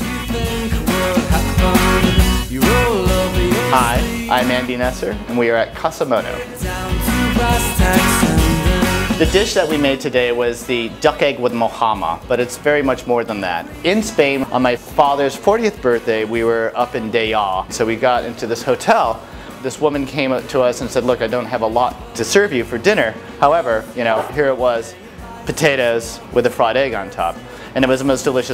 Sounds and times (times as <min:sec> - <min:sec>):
Music: 0:00.0 - 0:28.5
Speech: 0:03.6 - 0:06.5, 0:09.2 - 0:28.5.